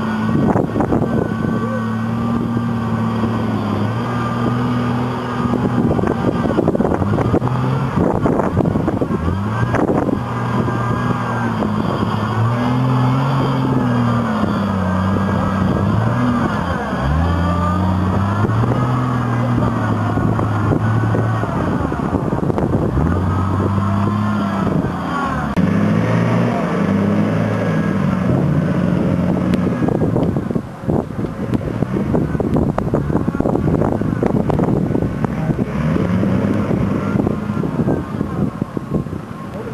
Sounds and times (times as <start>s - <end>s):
Vehicle: 0.0s - 39.7s.